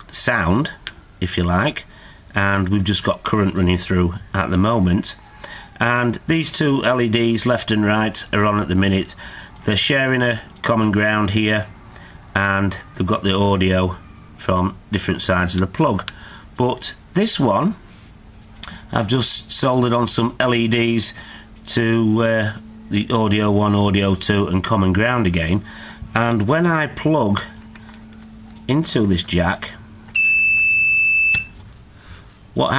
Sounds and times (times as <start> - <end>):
Speech: 0.0 - 5.2, 5.8 - 11.7, 12.4 - 17.8, 18.9 - 27.6, 28.6 - 29.8, 32.6 - 32.7
Inside, small room: 0.0 - 32.7
Smoke detector, smoke alarm: 30.2 - 31.6.